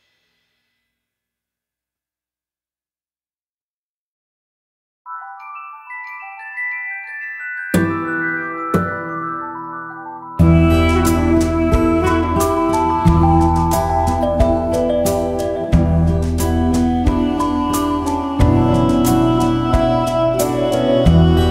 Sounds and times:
Music: 5.1s - 21.5s.

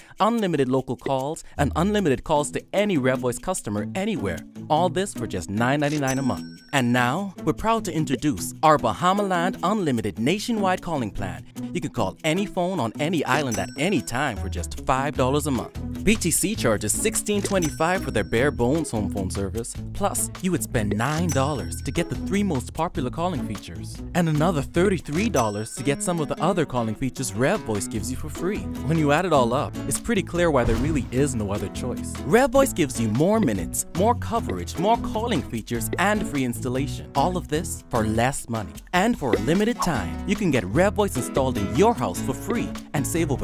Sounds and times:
Music: 0.0s - 43.4s
Speech: 0.1s - 43.4s.

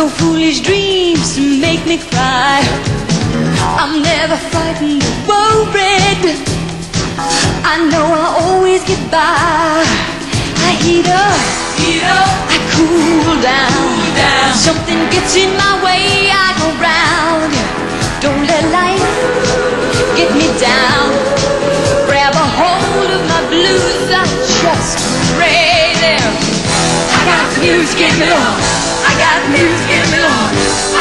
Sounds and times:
Pop music: 0.0s - 31.0s.

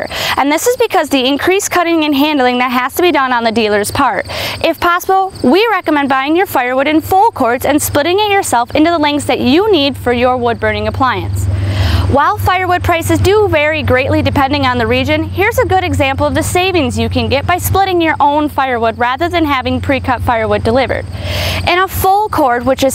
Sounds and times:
Speech: 0.0s - 11.4s, 12.1s - 21.1s, 21.7s - 22.9s.

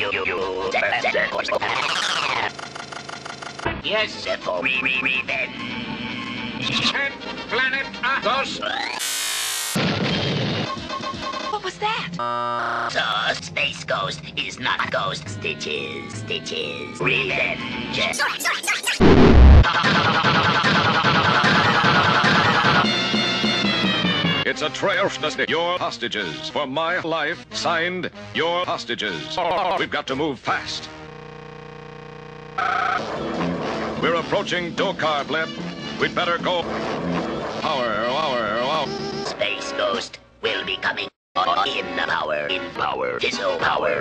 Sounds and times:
Music: 0.0s - 2.5s, 3.6s - 9.0s, 10.0s - 12.2s, 13.1s - 31.2s, 32.8s - 44.0s.

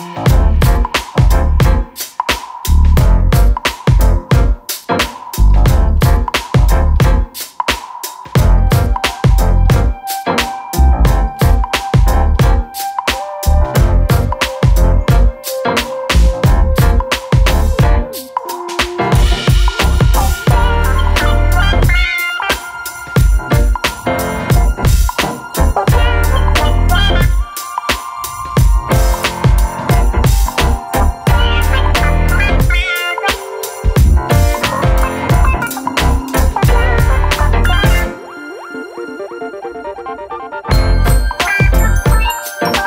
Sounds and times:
Music: 0.0s - 42.8s.

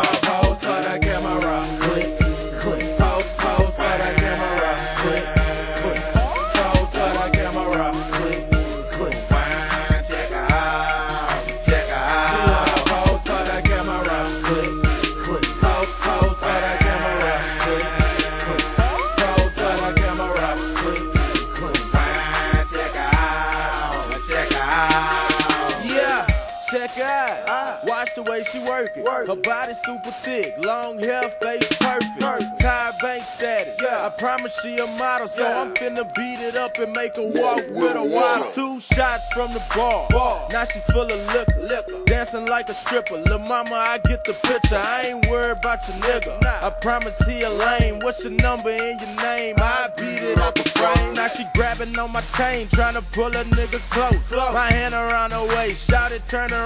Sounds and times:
Music: 0.0s - 56.6s.

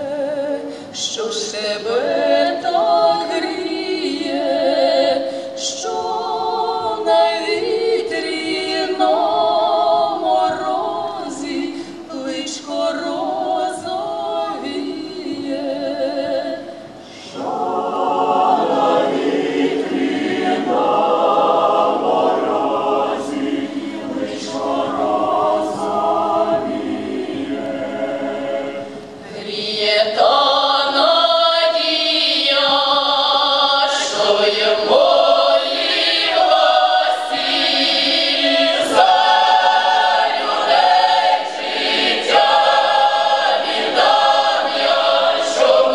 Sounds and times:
Chant: 0.0s - 45.9s.

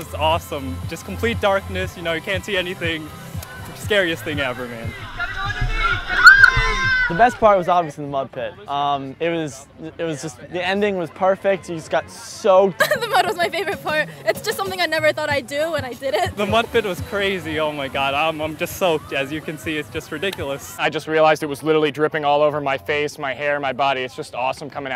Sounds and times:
Music: 0.0s - 7.7s, 8.4s - 24.9s.

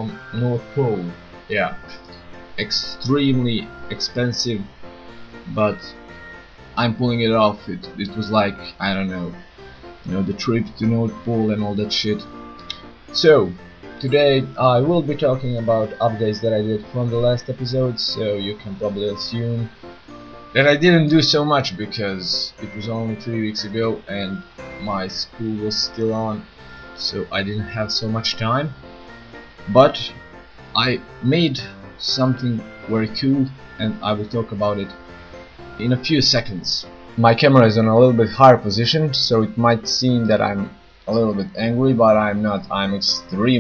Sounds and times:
Speech: 0.0s - 2.0s, 2.6s - 4.7s, 5.5s - 6.0s, 6.8s - 9.4s, 10.1s - 12.3s, 13.1s - 19.7s, 20.6s - 28.8s, 29.7s - 30.2s, 30.8s - 35.0s, 35.8s - 43.6s
Music: 0.0s - 43.6s.

